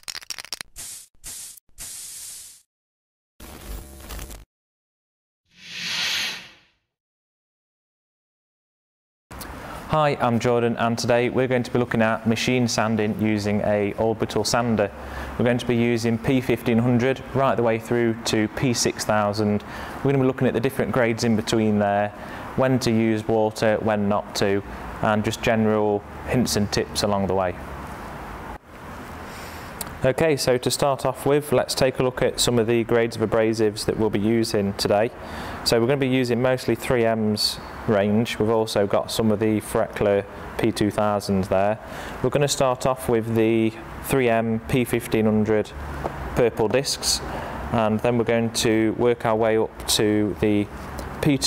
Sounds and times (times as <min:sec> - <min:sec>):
Speech: 0:09.9 - 0:27.6, 0:30.0 - 0:45.8, 0:46.4 - 0:51.4.